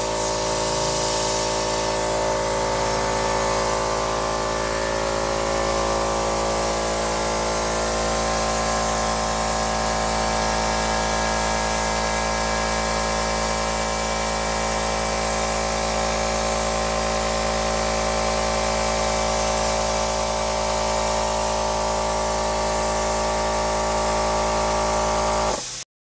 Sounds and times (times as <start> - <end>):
Spray: 0.0 - 25.9.